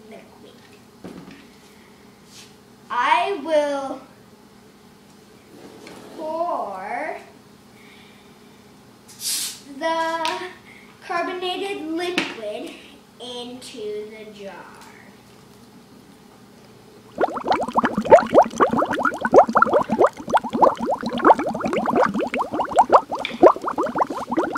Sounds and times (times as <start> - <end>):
Speech: 0.0 - 0.7, 2.9 - 4.1, 6.1 - 7.4, 9.7 - 15.2.